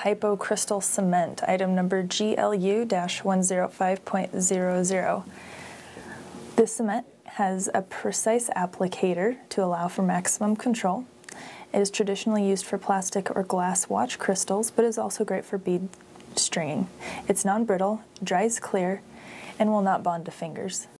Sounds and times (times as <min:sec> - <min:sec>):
Speech: 0:00.0 - 0:05.3, 0:06.6 - 0:11.1, 0:11.7 - 0:19.0, 0:19.6 - 0:20.9.